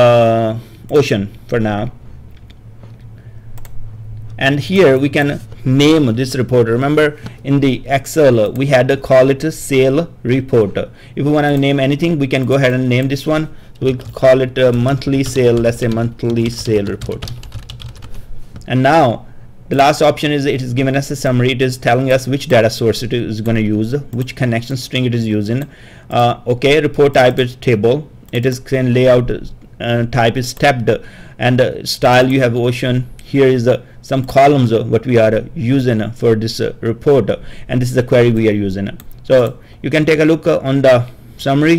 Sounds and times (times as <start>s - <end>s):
Typing: 13.8s - 18.7s.